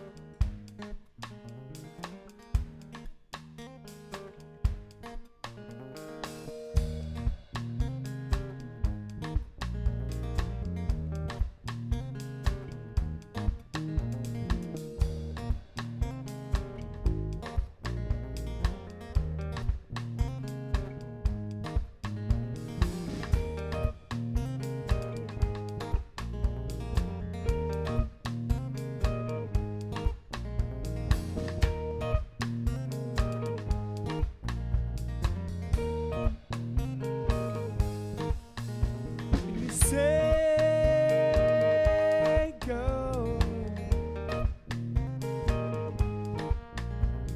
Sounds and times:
Music: 0.0 - 47.3.

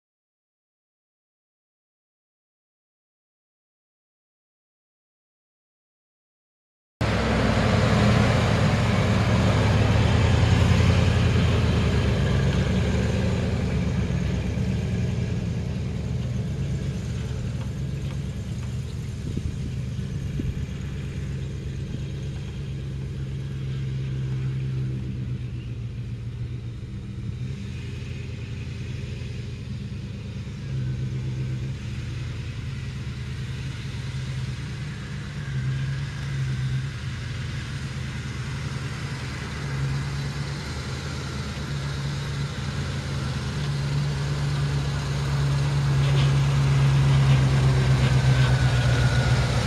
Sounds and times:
Vehicle: 7.0 - 49.6.

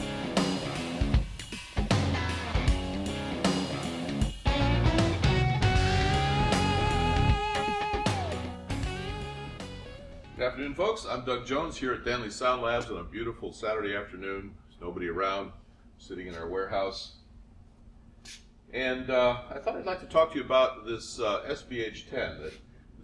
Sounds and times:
Speech: 10.4 - 17.2, 18.7 - 22.6.

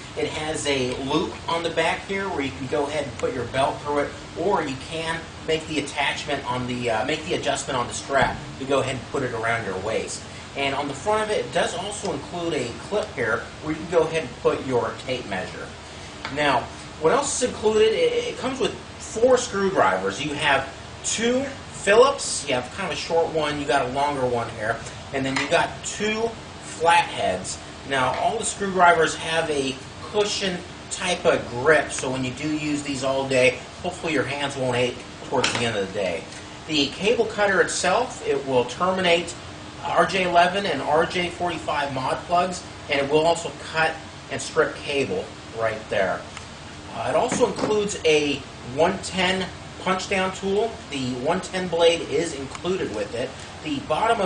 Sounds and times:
Speech: 0.0 - 46.3, 46.9 - 54.2.

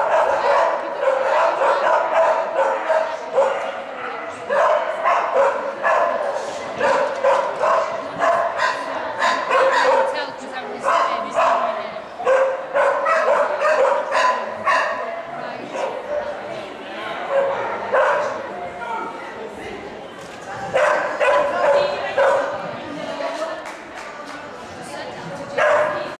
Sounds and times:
Speech: 0.0 - 26.1.

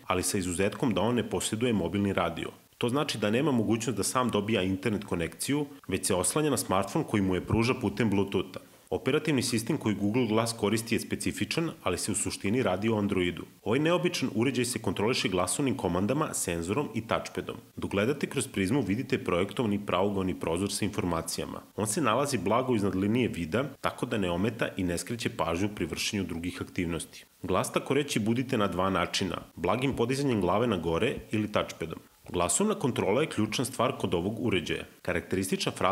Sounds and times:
Speech: 0.0 - 35.9.

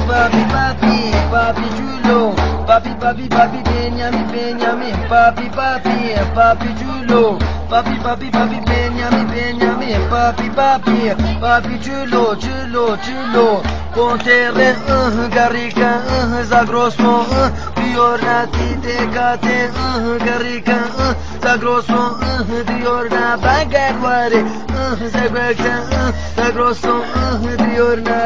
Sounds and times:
Male singing: 0.0 - 28.2
Music: 0.0 - 28.2.

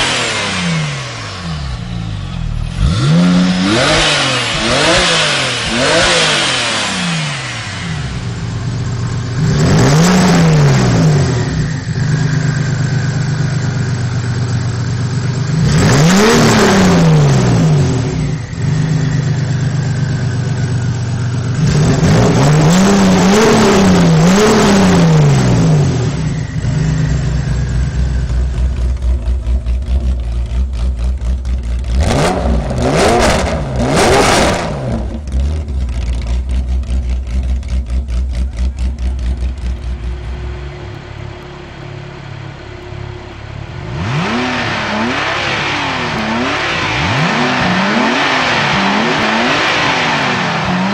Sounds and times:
Accelerating, revving, vroom: 0.0 - 1.2, 2.7 - 7.9, 9.4 - 11.7, 15.5 - 18.9, 21.6 - 26.8, 32.0 - 35.2, 43.8 - 50.9
Car: 0.0 - 50.9.

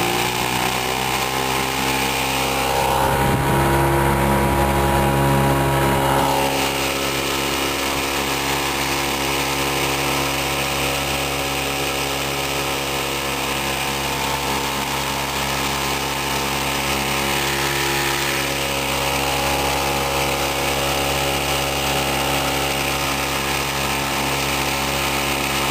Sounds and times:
Motorboat, speedboat: 0.0 - 25.7.

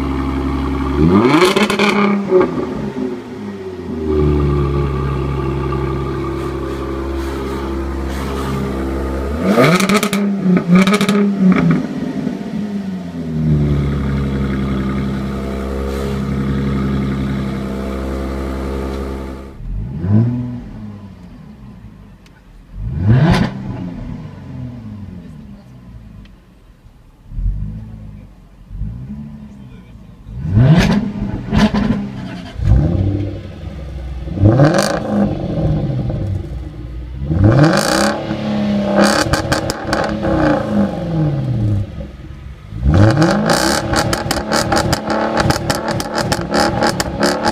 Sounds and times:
Car: 0.0 - 47.5
Accelerating, revving, vroom: 1.0 - 2.8, 9.3 - 11.9, 19.7 - 20.6, 22.8 - 24.7, 30.4 - 33.3, 34.3 - 36.2, 37.3 - 41.6, 42.8 - 47.5.

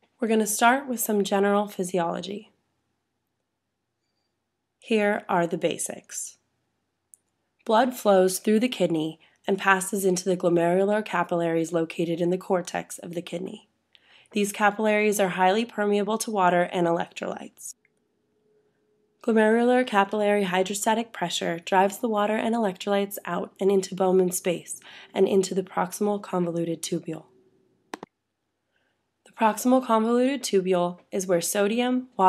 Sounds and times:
Speech: 0.2 - 2.5, 4.9 - 6.4, 7.7 - 13.6, 14.4 - 17.8, 19.3 - 27.2, 29.3 - 32.2.

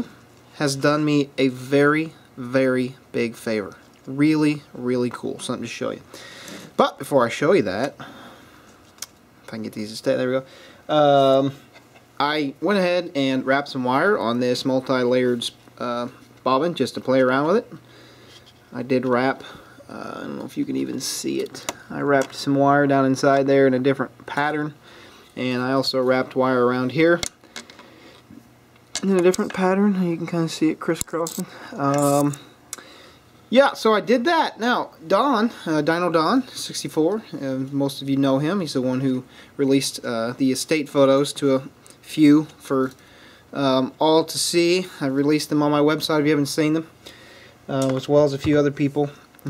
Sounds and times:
Speech: 0.0 - 6.1, 6.8 - 8.0, 9.5 - 11.6, 12.2 - 17.8, 18.7 - 24.8, 25.4 - 27.2, 29.0 - 32.5, 33.5 - 46.9, 47.7 - 49.5.

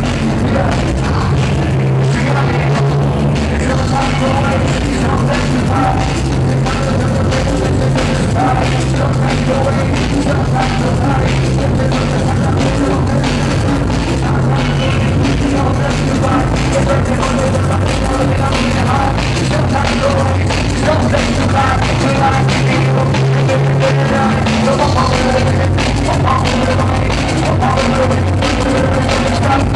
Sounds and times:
Drum and bass: 0.0 - 29.7.

